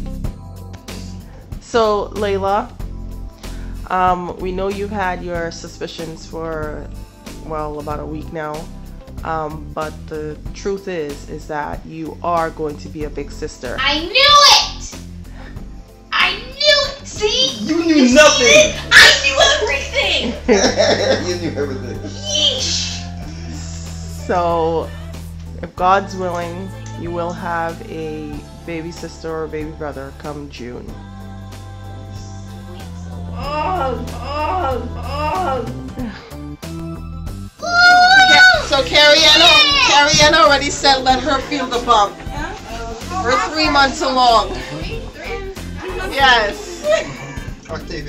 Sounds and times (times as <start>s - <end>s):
Music: 0.0s - 48.0s.